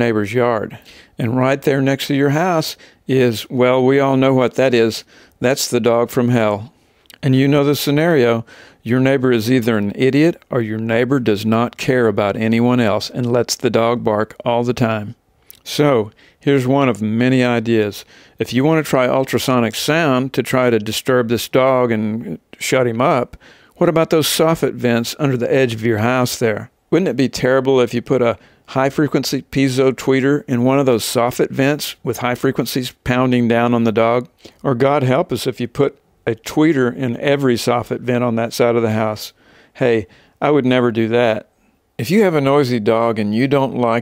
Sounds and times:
Speech: 0:00.0 - 0:44.0.

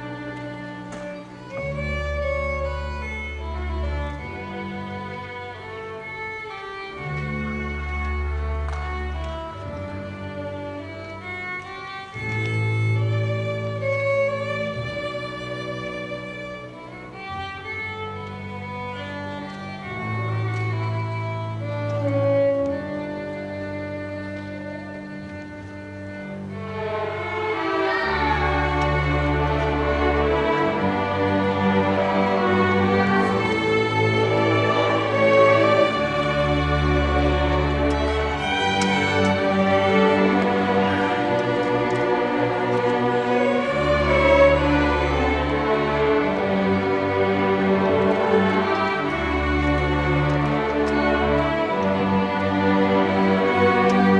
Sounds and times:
Violin, fiddle: 0:00.0 - 0:54.1.

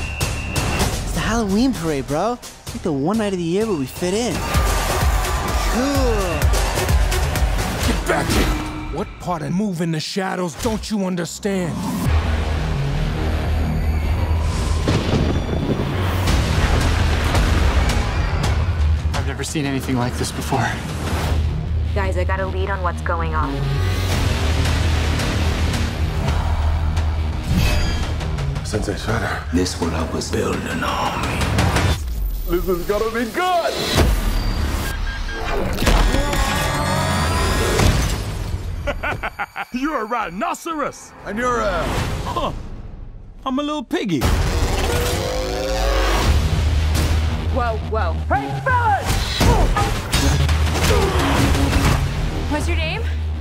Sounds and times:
Music: 0:00.0 - 0:53.4.

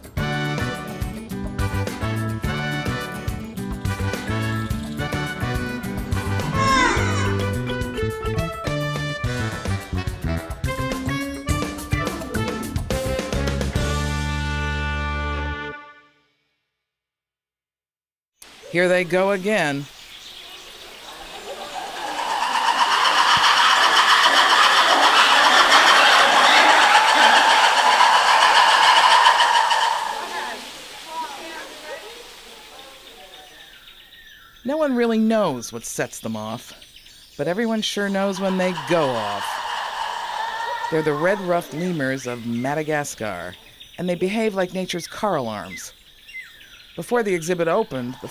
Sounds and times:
Speech: 0:18.7 - 0:19.9, 0:34.7 - 0:36.8, 0:37.4 - 0:39.5, 0:40.9 - 0:46.0, 0:47.0 - 0:48.3.

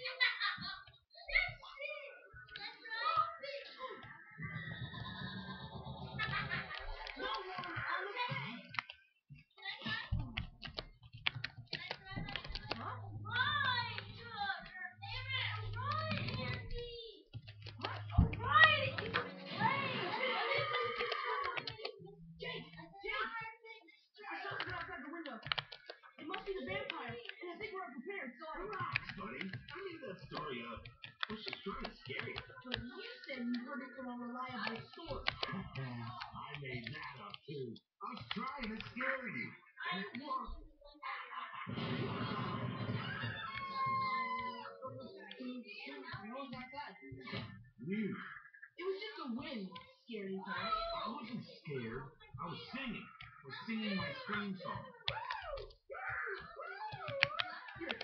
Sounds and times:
Speech: 0:00.0 - 0:04.8, 0:09.6 - 0:10.5, 0:11.8 - 0:41.7, 0:43.1 - 0:58.0.

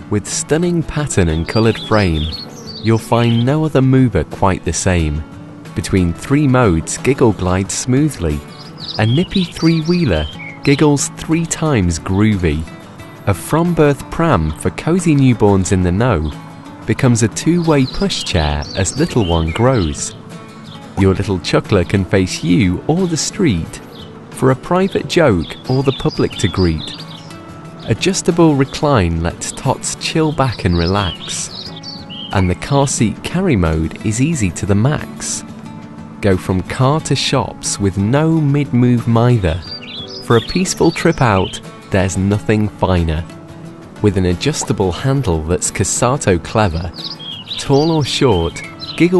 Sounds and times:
Music: 0:00.0 - 0:49.1
Speech: 0:00.1 - 0:20.2, 0:21.0 - 0:23.8, 0:24.4 - 0:27.0, 0:27.8 - 0:31.6, 0:32.3 - 0:35.5, 0:36.2 - 0:43.4, 0:44.0 - 0:47.0, 0:47.6 - 0:49.1.

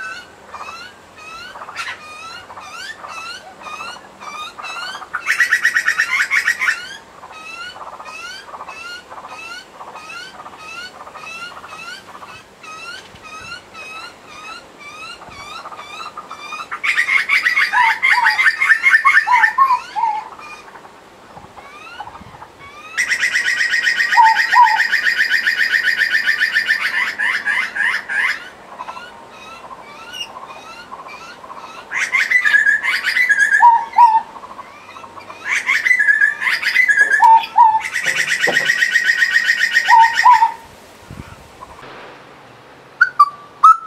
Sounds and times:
Bird vocalization, bird call, bird song: 0:00.0 - 0:21.0, 0:21.6 - 0:40.6, 0:43.0 - 0:43.8.

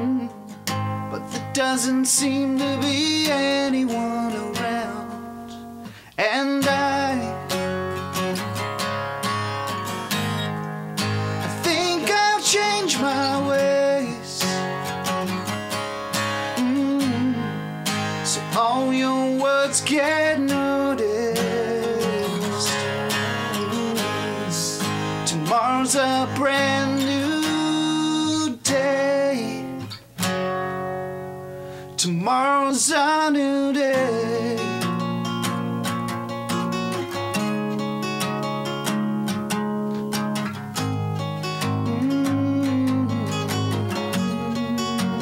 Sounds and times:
Music: 0:00.0 - 0:45.2.

